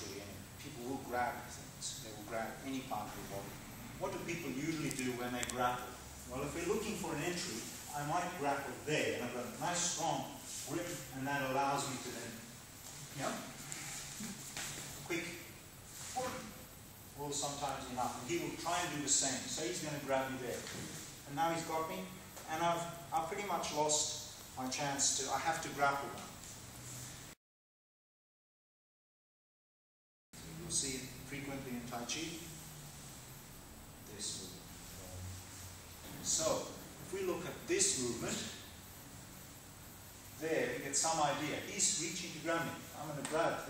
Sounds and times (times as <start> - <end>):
Speech: 0.0 - 12.5, 13.1 - 13.5, 15.0 - 15.5, 16.1 - 16.6, 17.2 - 26.4, 30.6 - 32.6, 34.0 - 35.2, 36.1 - 38.6, 40.4 - 43.6.